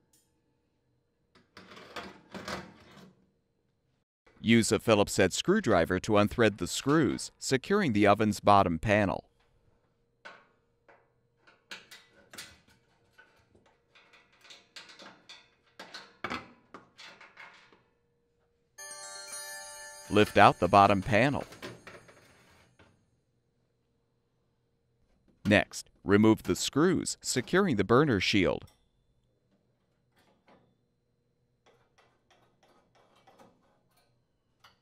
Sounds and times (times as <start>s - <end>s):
Speech: 4.4s - 9.3s, 20.1s - 21.5s, 25.4s - 28.7s
Music: 18.8s - 21.6s.